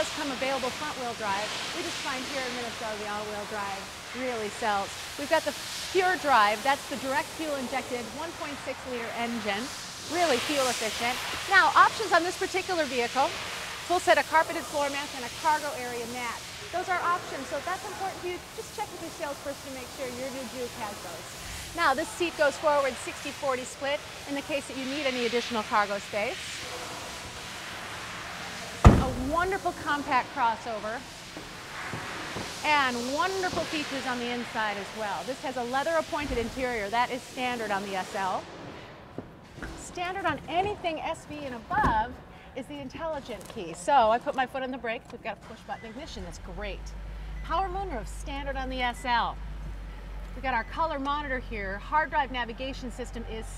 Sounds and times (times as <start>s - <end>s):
Speech: 0.0s - 13.3s, 13.9s - 21.2s, 21.8s - 26.4s, 32.6s - 38.4s, 39.8s - 46.9s, 47.5s - 49.4s, 50.4s - 53.5s.